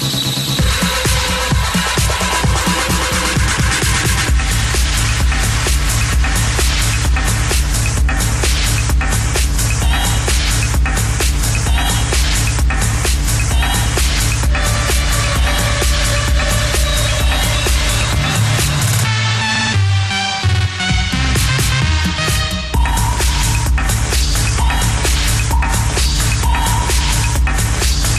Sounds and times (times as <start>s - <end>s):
Music: 0.0s - 28.1s.